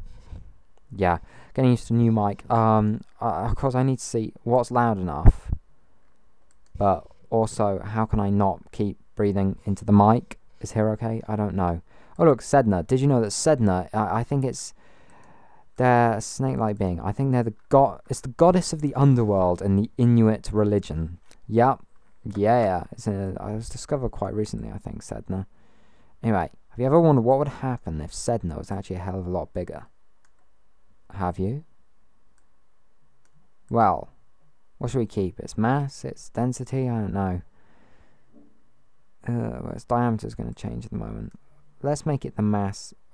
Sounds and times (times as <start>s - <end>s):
Speech: 0.9s - 5.6s, 6.8s - 14.8s, 15.8s - 25.5s, 26.2s - 30.0s, 31.1s - 31.7s, 33.7s - 34.2s, 34.8s - 37.5s, 39.2s - 43.0s.